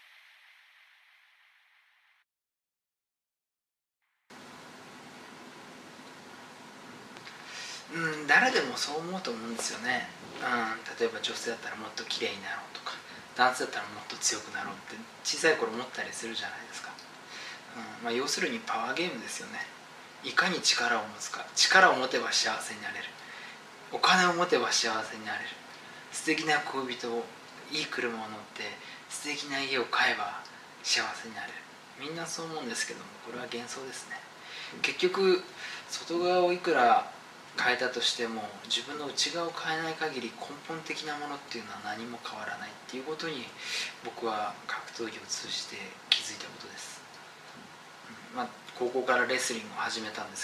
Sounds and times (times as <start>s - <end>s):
Inside, small room: 0.0s - 2.3s, 4.0s - 50.4s
Speech: 7.8s - 17.1s, 17.7s - 23.2s, 23.9s - 47.1s, 48.1s - 50.4s.